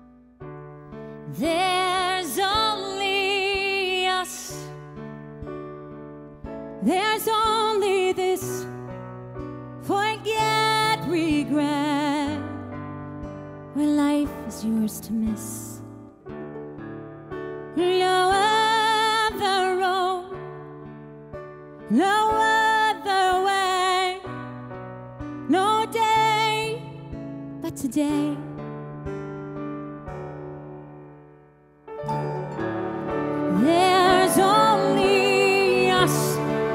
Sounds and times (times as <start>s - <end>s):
Singing: 33.5s - 36.7s.